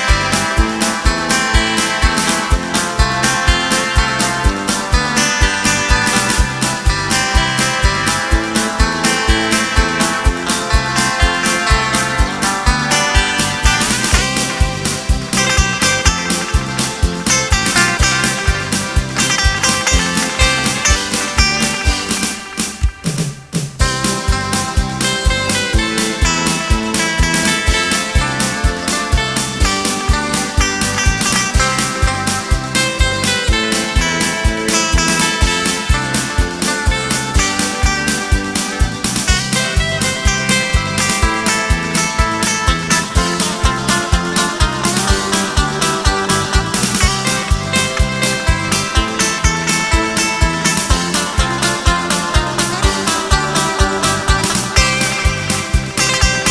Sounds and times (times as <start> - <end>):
Acoustic guitar: 0.0 - 56.5.